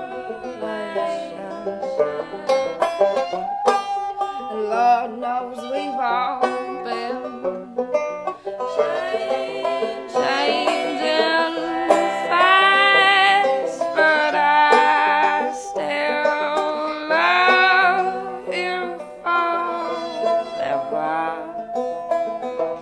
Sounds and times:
Music: 0:00.0 - 0:22.8.

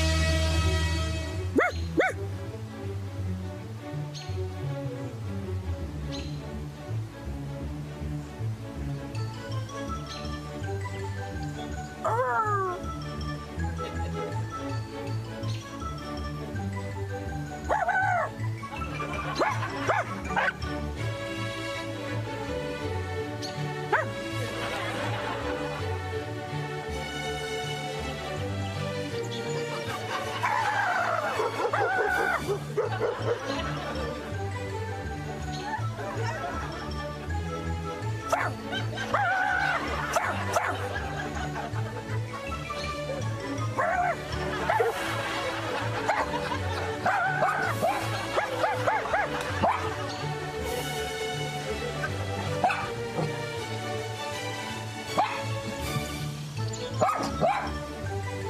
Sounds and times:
Music: 0:00.0 - 0:58.5
Bark: 0:01.6 - 0:02.2, 0:17.7 - 0:18.3, 0:19.4 - 0:20.6, 0:23.9 - 0:24.1, 0:31.3 - 0:33.4, 0:38.3 - 0:38.6, 0:40.2 - 0:40.8, 0:47.1 - 0:49.9, 0:52.6 - 0:53.0, 0:55.2 - 0:55.4, 0:57.0 - 0:57.8
Laughter: 0:18.8 - 0:20.4, 0:24.4 - 0:26.0, 0:29.8 - 0:34.3, 0:36.0 - 0:37.0, 0:38.7 - 0:42.7, 0:44.2 - 0:50.3.

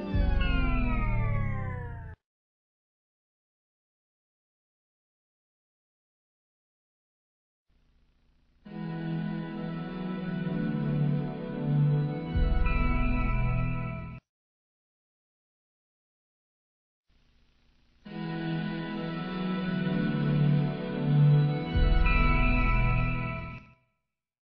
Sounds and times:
Music: 0:00.0 - 0:02.2, 0:08.6 - 0:14.2, 0:18.0 - 0:24.0.

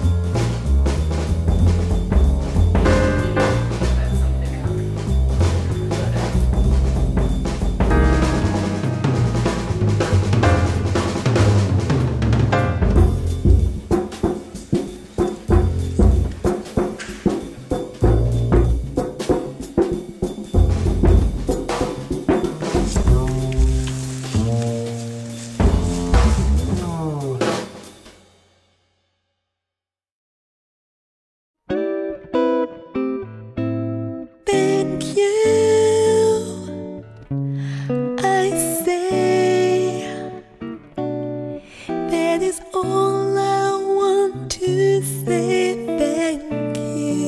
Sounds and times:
Timpani: 0:00.0 - 0:28.6
Speech: 0:03.4 - 0:06.6, 0:26.6 - 0:27.7, 0:38.2 - 0:40.1, 0:42.1 - 0:47.2.

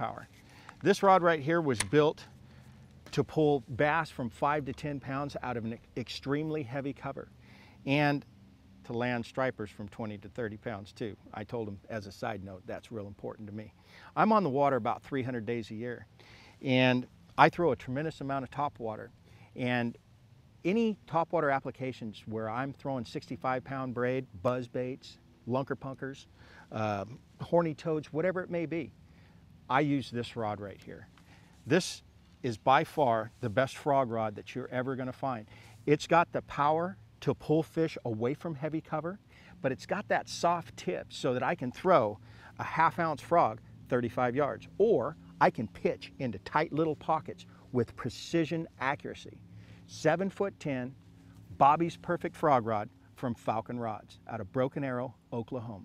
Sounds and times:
Speech: 0:00.0 - 0:02.3, 0:03.1 - 0:20.0, 0:20.6 - 0:28.9, 0:29.7 - 0:55.8.

